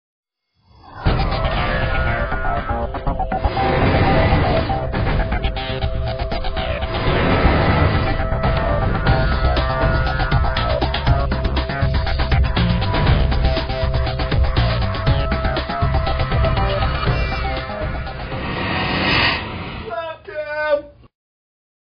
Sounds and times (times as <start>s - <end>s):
Music: 0.8s - 19.9s.